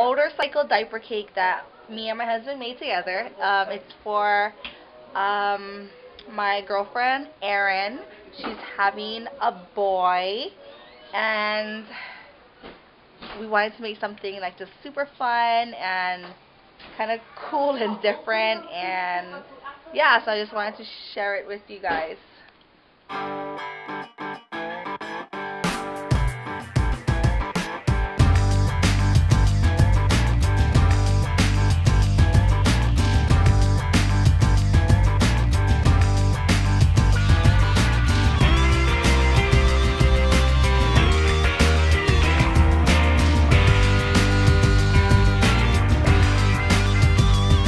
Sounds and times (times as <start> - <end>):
Music: 23.1 - 47.6.